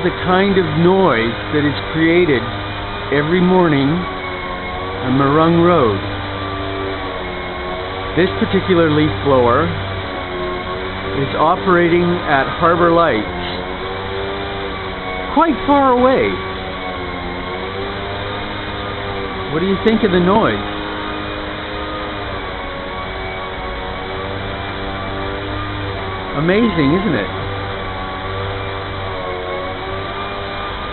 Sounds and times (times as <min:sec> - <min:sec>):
Speech: 0:00.0 - 0:02.5, 0:03.2 - 0:04.1, 0:05.1 - 0:06.0, 0:08.2 - 0:09.8, 0:11.2 - 0:13.4, 0:15.4 - 0:16.4, 0:19.5 - 0:20.6, 0:26.4 - 0:27.4.